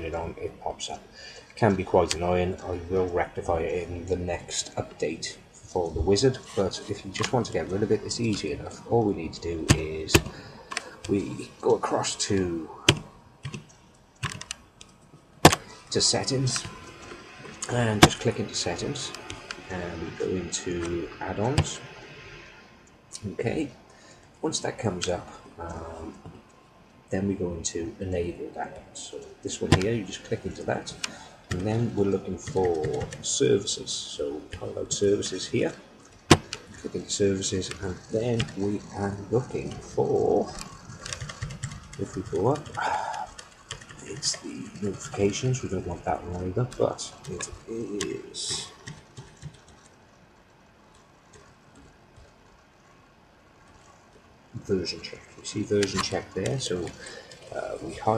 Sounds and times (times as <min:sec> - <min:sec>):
Speech: 0:00.0 - 0:13.0, 0:15.8 - 0:16.8, 0:17.5 - 0:22.0, 0:23.2 - 0:23.8, 0:24.4 - 0:26.3, 0:27.1 - 0:35.8, 0:36.7 - 0:40.7, 0:42.0 - 0:43.4, 0:44.0 - 0:48.8, 0:54.6 - 0:58.1
Typing: 0:12.8 - 0:15.7, 0:30.9 - 0:33.3, 0:37.7 - 0:45.7, 0:46.6 - 0:50.0.